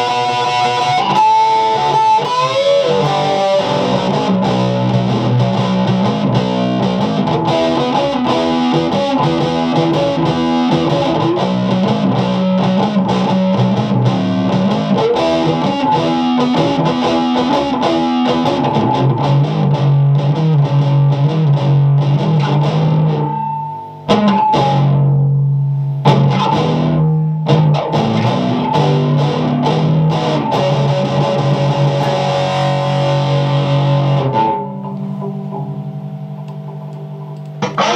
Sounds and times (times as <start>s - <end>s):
Electric guitar: 0.0s - 37.9s
Strum: 0.0s - 37.9s.